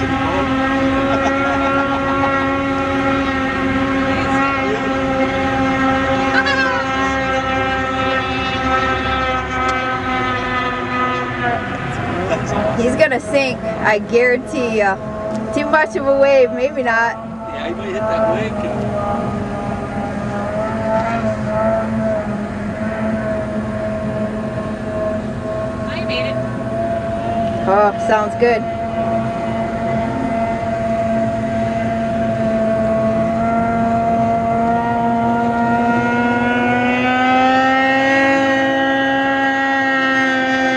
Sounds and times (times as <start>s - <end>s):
Motorboat, speedboat: 0.0s - 40.7s.